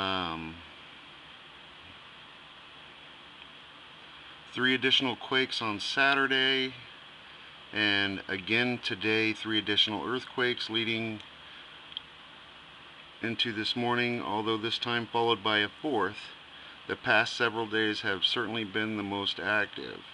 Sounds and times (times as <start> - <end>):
Speech: 0.0 - 0.7, 4.5 - 6.9, 7.7 - 11.2, 13.2 - 20.1.